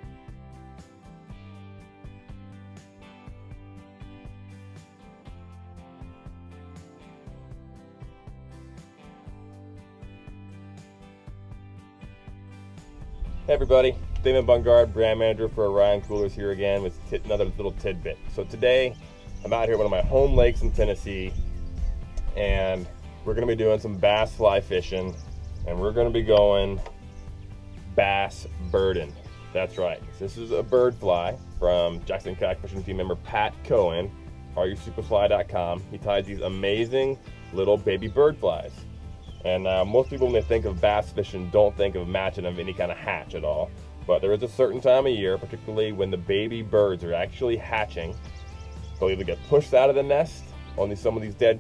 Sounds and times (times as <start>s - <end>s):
Music: 0.0s - 51.6s
Speech: 13.5s - 21.4s, 22.4s - 26.8s, 27.9s - 38.8s, 39.4s - 48.2s, 49.0s - 51.6s.